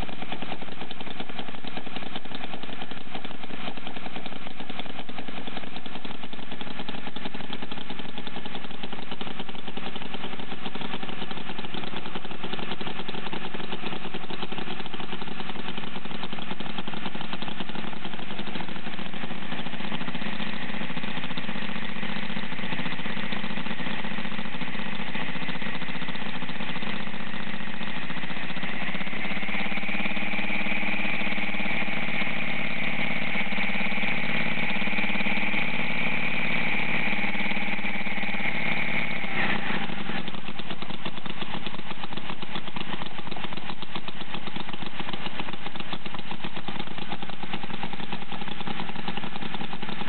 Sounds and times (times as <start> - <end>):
Medium engine (mid frequency): 0.0 - 50.0.